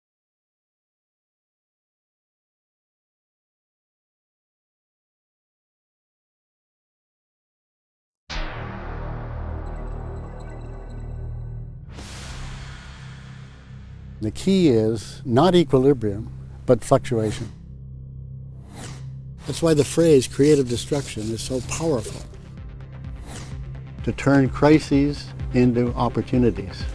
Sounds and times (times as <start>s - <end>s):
Music: 8.3s - 26.9s
Speech: 14.2s - 17.6s, 19.4s - 22.3s, 24.0s - 26.9s.